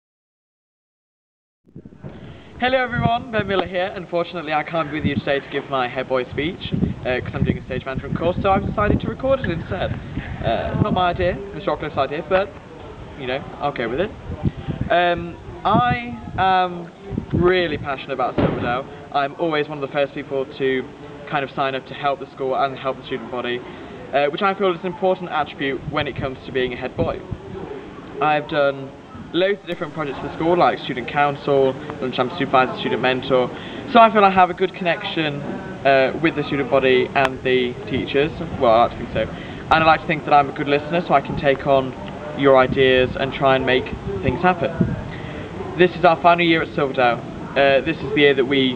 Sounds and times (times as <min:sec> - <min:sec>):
Narration, monologue: 0:01.9 - 0:27.4, 0:28.0 - 0:48.7.